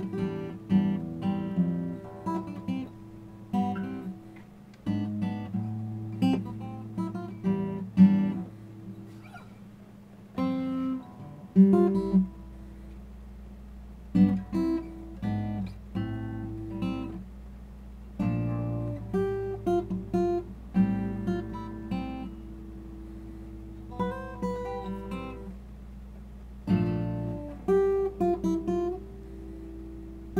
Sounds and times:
Strum: 0:00.0 - 0:13.3
Acoustic guitar: 0:00.0 - 0:30.3.

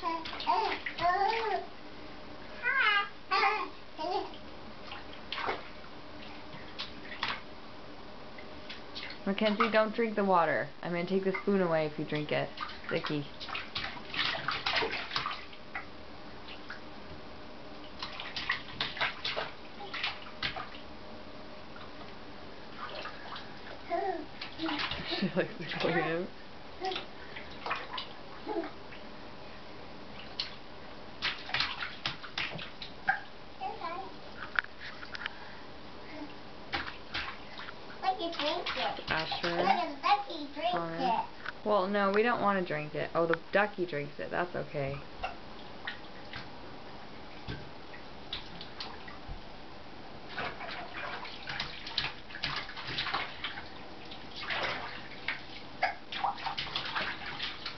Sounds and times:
Bathtub (filling or washing): 0:00.0 - 0:07.5, 0:08.4 - 0:16.9, 0:17.8 - 0:20.9, 0:21.7 - 0:49.5, 0:50.2 - 0:57.7
Inside, small room: 0:00.0 - 0:57.7.

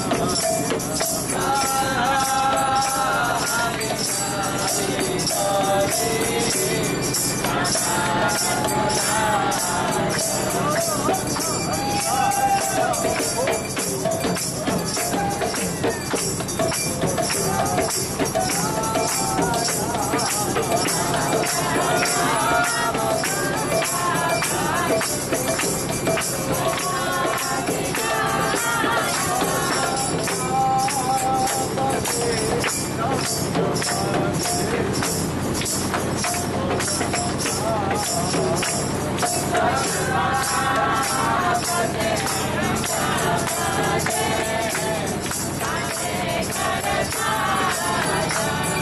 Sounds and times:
Boat, Water vehicle: 0:00.0 - 0:48.8
Music: 0:00.0 - 0:48.8.

